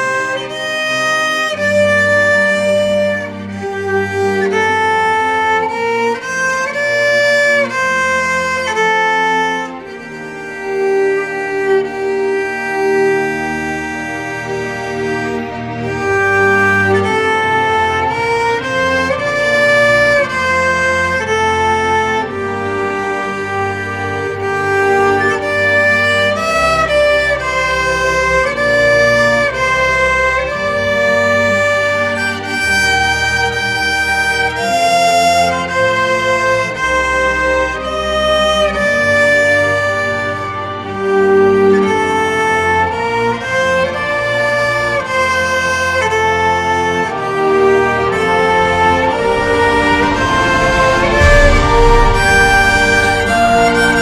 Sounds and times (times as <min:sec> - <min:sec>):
Violin, fiddle: 0:00.0 - 0:54.0.